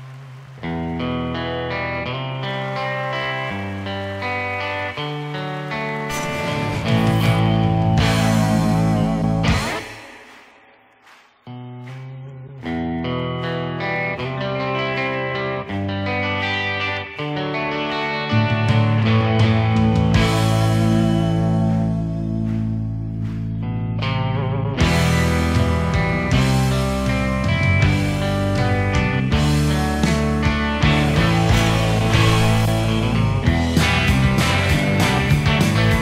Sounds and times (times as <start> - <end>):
Electric guitar: 0.0 - 36.0.